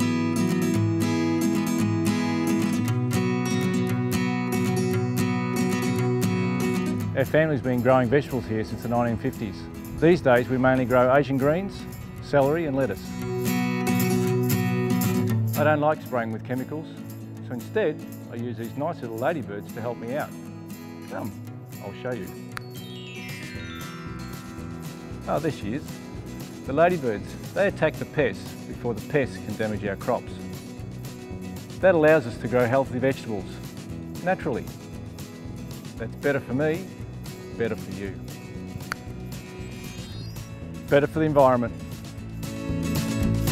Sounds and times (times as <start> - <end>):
Music: 0.0 - 43.5
Speech: 7.2 - 13.1, 15.6 - 20.3, 21.1 - 22.4, 25.3 - 25.9, 26.7 - 30.4, 31.8 - 33.6, 34.2 - 34.7, 36.0 - 36.9, 37.6 - 38.2, 40.9 - 41.7.